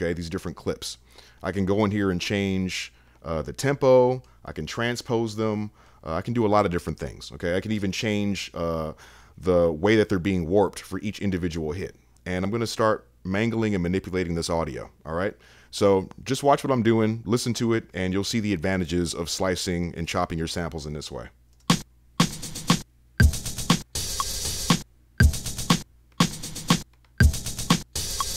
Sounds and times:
Speech: 0.0s - 21.4s
Drum machine: 21.6s - 28.3s.

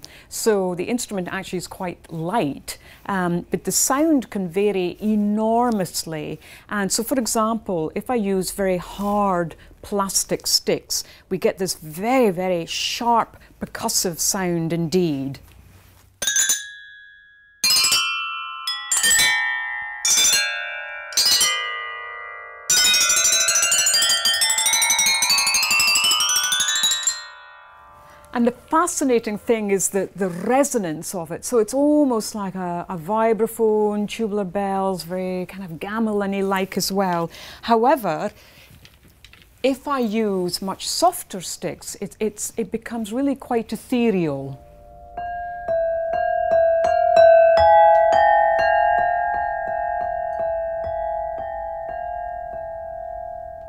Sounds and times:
Speech: 0.3s - 15.4s, 28.3s - 38.3s, 39.6s - 44.6s
Percussion: 16.2s - 31.0s, 44.6s - 53.6s.

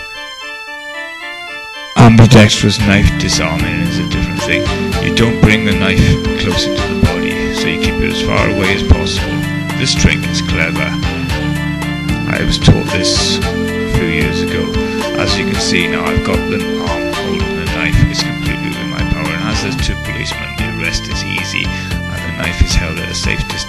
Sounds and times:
Music: 0.0s - 23.6s
Speech: 2.0s - 11.1s, 12.3s - 23.6s.

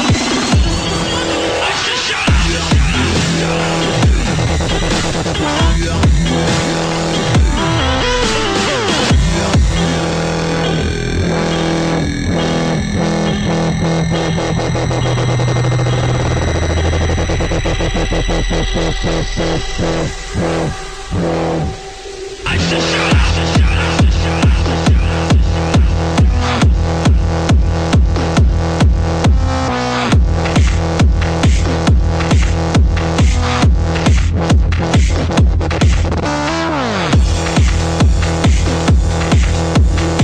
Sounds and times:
Music: 0.0s - 40.2s.

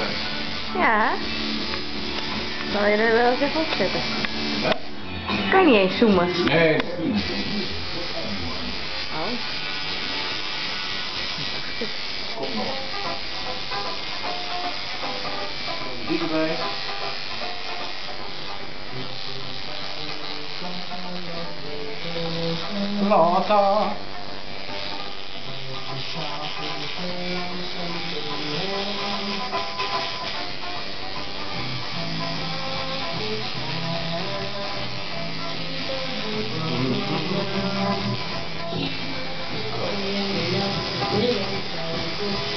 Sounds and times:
Music: 0.0s - 42.5s.

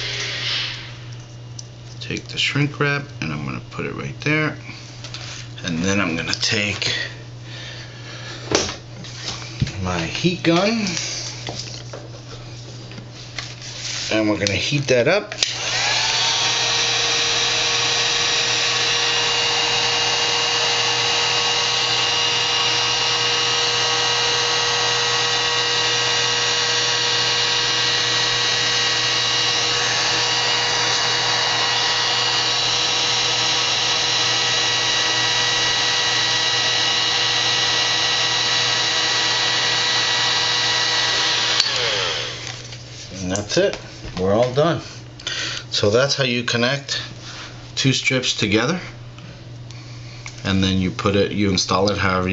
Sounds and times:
Speech: 2.0s - 4.6s, 5.6s - 7.2s, 9.7s - 11.0s, 14.1s - 15.4s, 43.1s - 44.9s, 45.7s - 47.1s, 47.8s - 49.0s, 50.4s - 52.3s.

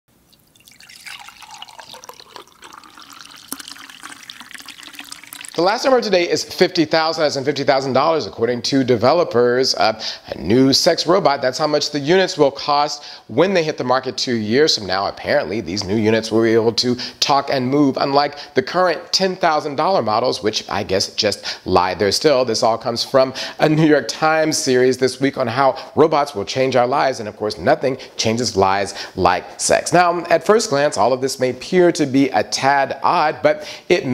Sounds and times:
Water: 0.2s - 6.1s
Speech: 5.6s - 34.1s.

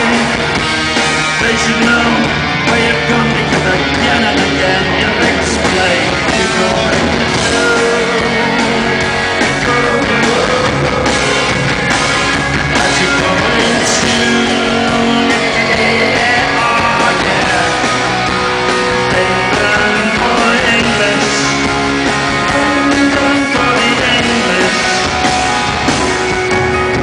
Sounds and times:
Music: 0.0s - 27.0s.

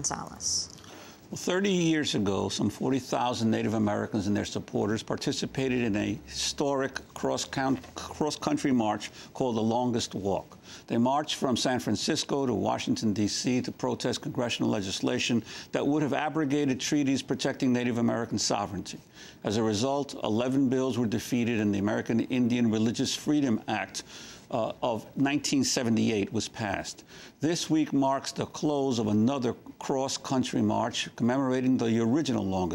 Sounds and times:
Speech: 0.0s - 0.7s, 1.3s - 32.7s.

